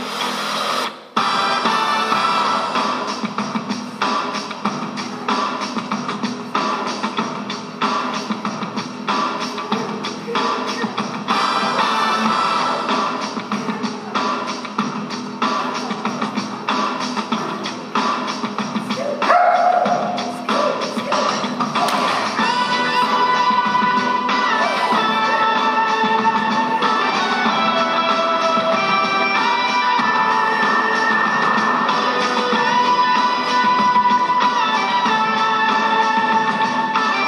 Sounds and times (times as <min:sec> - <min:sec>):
Music: 0:00.0 - 0:37.2.